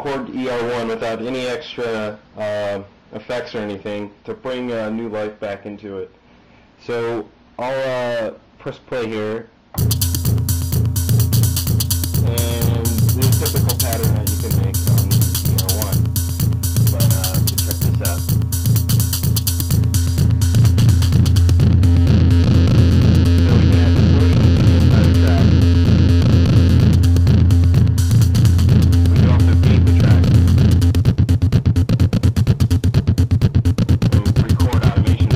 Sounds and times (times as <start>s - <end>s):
Speech: 0.0s - 6.2s, 6.8s - 9.5s, 12.2s - 16.0s, 16.9s - 18.3s, 23.4s - 25.5s, 29.1s - 30.3s, 34.1s - 35.3s
Sampler: 9.8s - 35.3s.